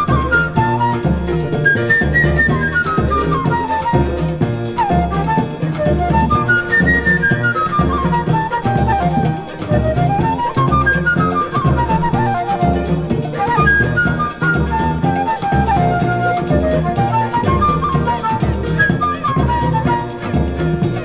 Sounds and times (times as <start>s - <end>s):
Flute: 0.0s - 21.0s.